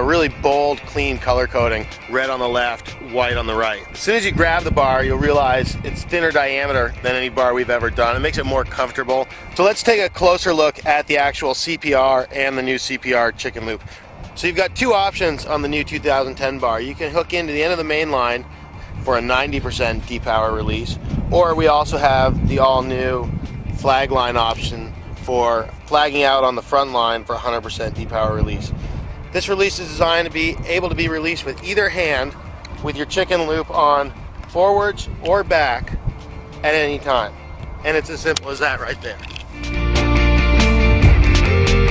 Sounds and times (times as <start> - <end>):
Speech: 0.0 - 13.8, 14.4 - 18.4, 19.0 - 28.7, 29.4 - 36.0, 36.6 - 39.3
Music: 0.0 - 41.9.